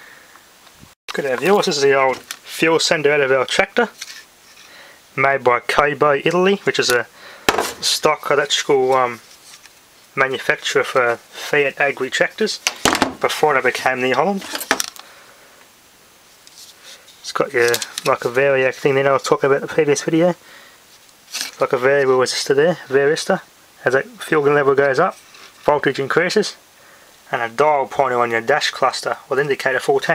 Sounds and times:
Speech: 1.1s - 4.0s, 5.2s - 7.1s, 7.8s - 9.2s, 10.2s - 14.6s, 17.2s - 20.4s, 21.6s - 26.6s, 27.3s - 30.1s.

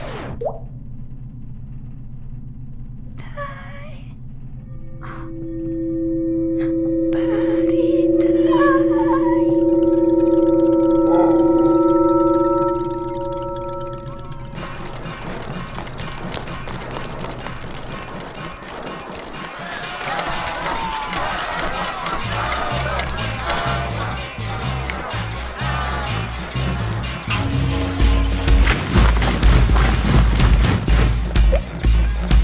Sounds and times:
Chirp tone: 4.6s - 15.0s.

